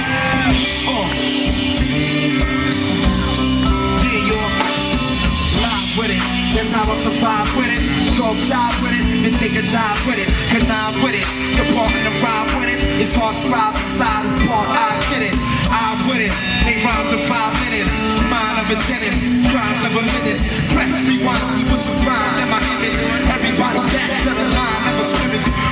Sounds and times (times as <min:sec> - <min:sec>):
Music: 0:00.0 - 0:25.7
Singing: 0:00.0 - 0:25.7.